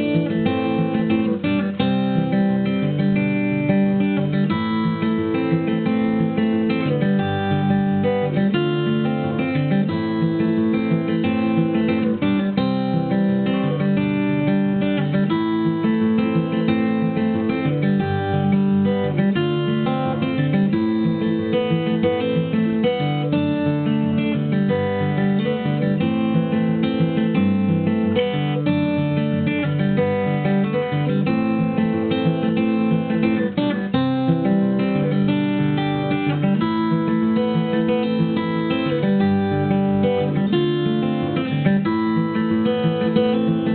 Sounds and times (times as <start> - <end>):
Music: 0.0 - 43.7.